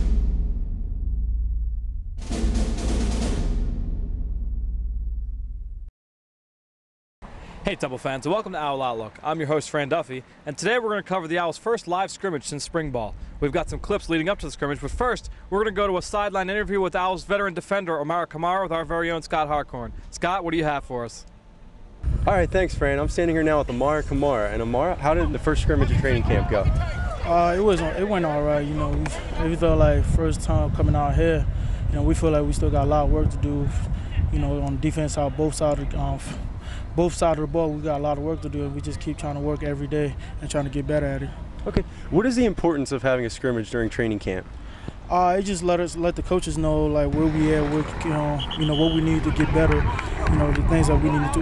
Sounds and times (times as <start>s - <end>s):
Speech: 7.6s - 21.3s, 22.3s - 36.4s, 37.0s - 44.4s, 45.1s - 51.4s.